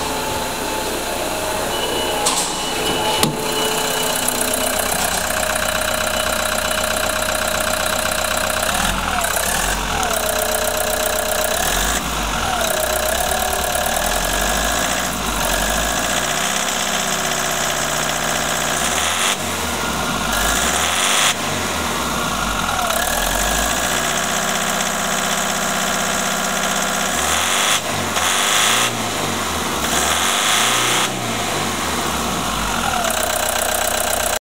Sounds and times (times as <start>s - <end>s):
Engine starting: 0.0s - 34.4s
Idling: 0.0s - 34.4s
Medium engine (mid frequency): 0.0s - 34.4s
Vehicle: 0.0s - 34.4s
Accelerating, revving, vroom: 11.4s - 22.2s, 26.6s - 33.7s.